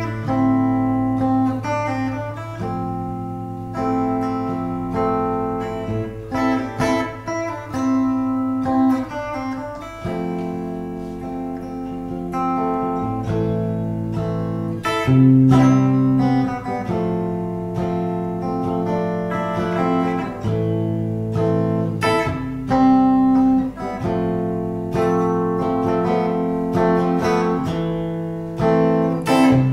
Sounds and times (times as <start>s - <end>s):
Guitar: 0.0s - 29.7s.